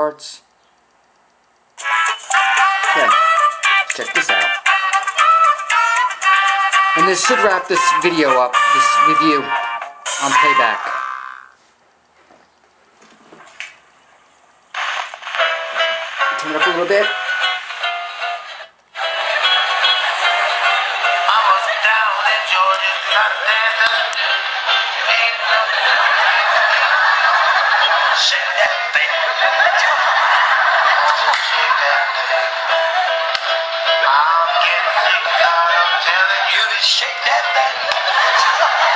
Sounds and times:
Speech: 0.0 - 0.4, 3.9 - 4.6, 7.0 - 9.5, 10.2 - 10.9, 16.4 - 17.2
Television: 0.0 - 38.9
Music: 1.8 - 11.0, 14.8 - 38.9.

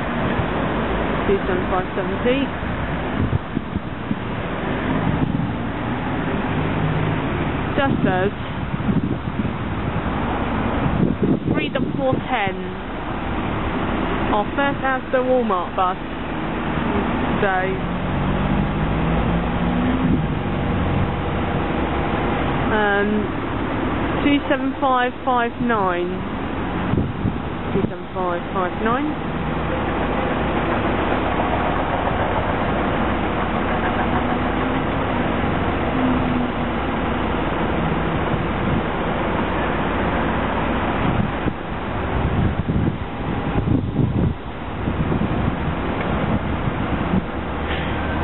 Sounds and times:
Bus: 0.0 - 48.2
Speech: 1.3 - 2.5, 7.8 - 8.4, 11.6 - 12.8, 14.3 - 16.0, 17.4 - 17.8, 22.7 - 23.3, 24.2 - 26.2, 27.8 - 29.2.

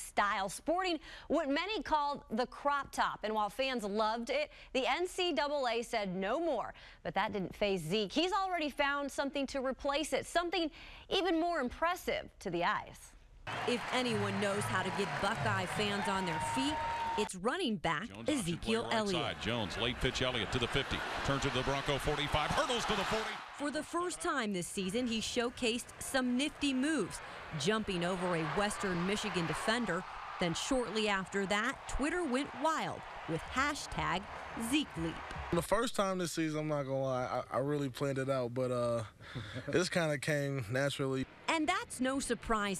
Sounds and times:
Speech: 0.0 - 13.0, 13.7 - 42.7.

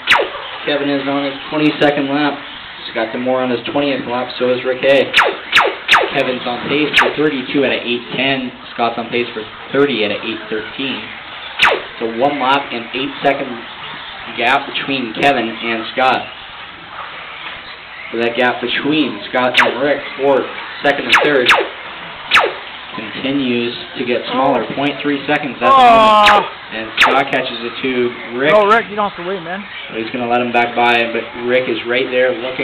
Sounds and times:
Speech: 0.7 - 5.1, 6.2 - 11.1, 12.0 - 13.7, 14.3 - 16.3, 18.2 - 21.5, 23.0 - 32.6.

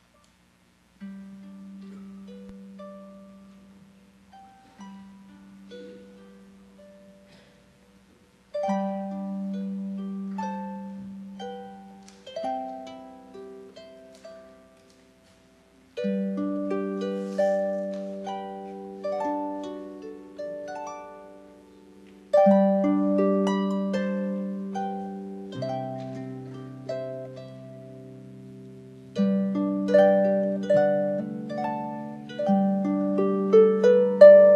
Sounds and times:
Harp: 1.0 - 34.5.

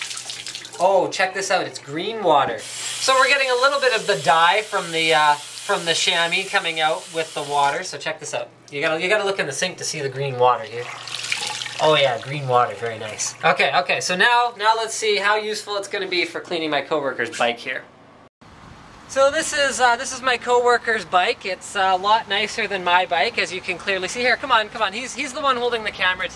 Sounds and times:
Sink (filling or washing): 0.0 - 0.8, 2.6 - 7.9, 10.7 - 13.6
Speech: 0.8 - 10.9, 11.8 - 17.9, 19.1 - 26.3
Outside, urban or manmade: 17.9 - 26.3.

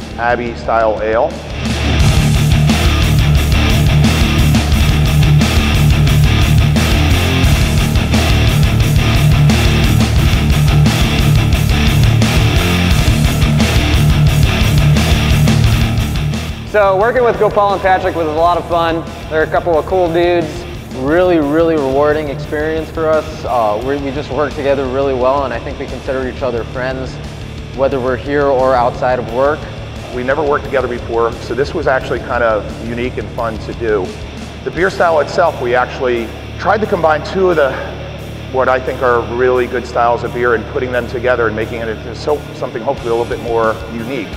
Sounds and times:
Music: 0.0 - 44.3
Speech: 0.1 - 1.4, 16.7 - 27.2, 27.8 - 44.3.

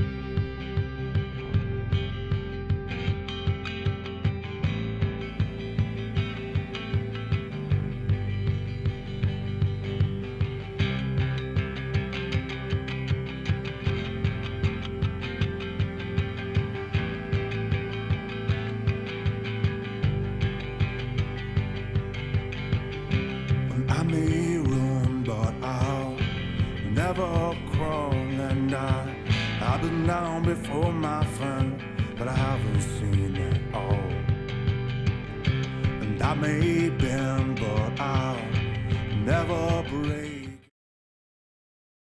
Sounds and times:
Music: 0.0 - 40.7.

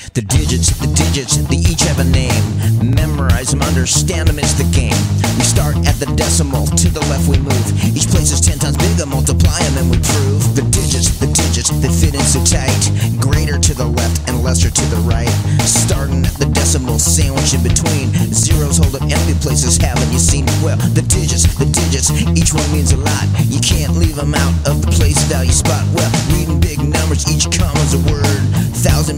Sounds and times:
Rock and roll: 0.0 - 29.1.

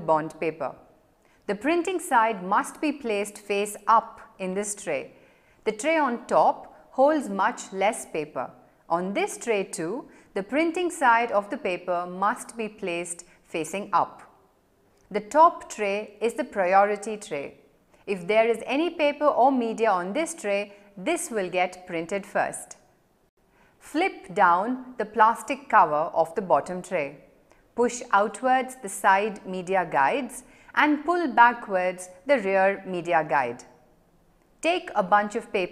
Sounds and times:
Speech: 0.0 - 0.8, 1.5 - 5.1, 5.7 - 14.3, 15.1 - 22.8, 23.9 - 27.2, 27.8 - 33.7, 34.6 - 35.7.

